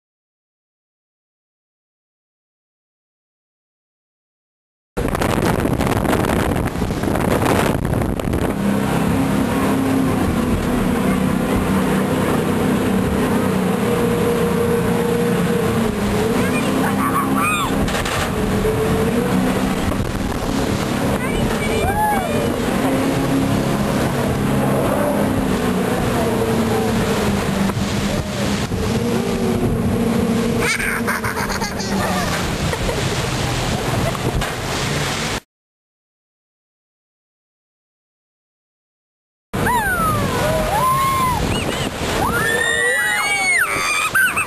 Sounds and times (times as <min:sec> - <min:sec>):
Motorboat, speedboat: 0:05.0 - 0:35.5, 0:39.6 - 0:44.4.